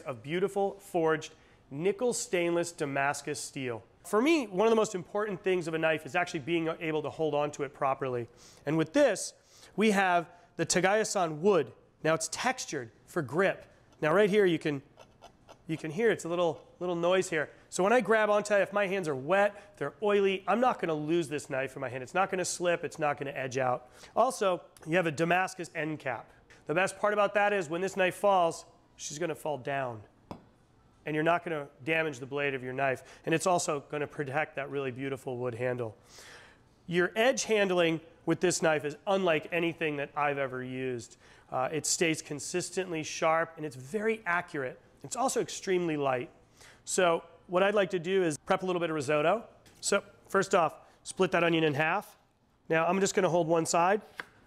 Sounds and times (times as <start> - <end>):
Speech: 0.0 - 14.9, 15.6 - 30.1, 31.0 - 36.0, 36.9 - 54.1.